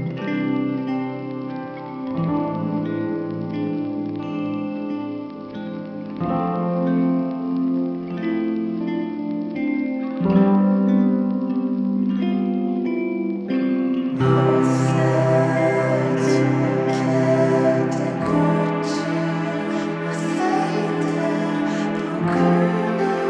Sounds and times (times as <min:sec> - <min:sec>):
Music: 0:00.0 - 0:23.2.